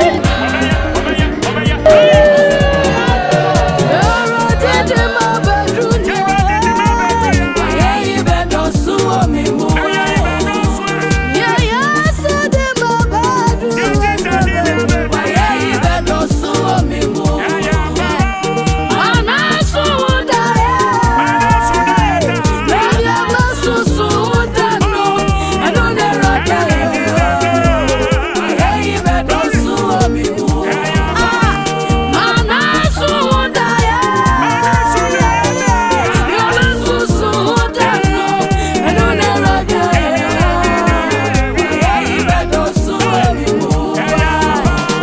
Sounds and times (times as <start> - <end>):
Gospel music: 0.0 - 45.0.